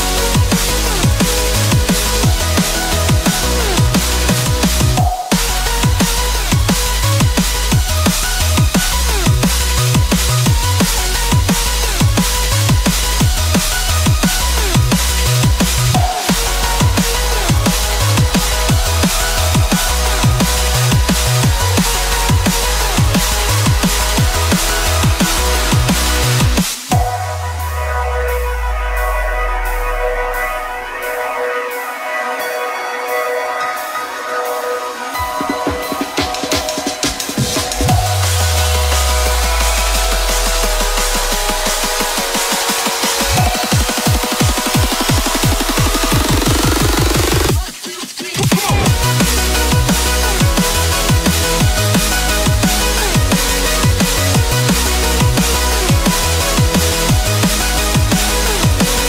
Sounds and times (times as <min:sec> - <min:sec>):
Drum and bass: 0:00.0 - 0:59.0.